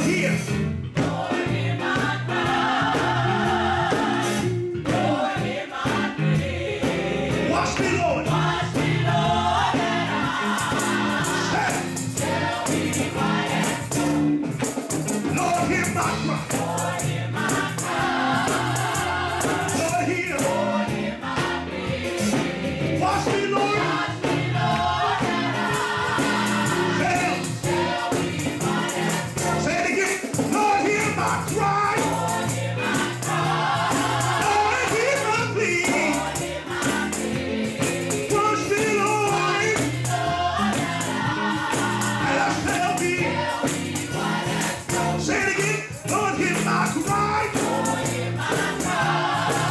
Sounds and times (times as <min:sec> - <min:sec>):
Music: 0:00.0 - 0:49.7.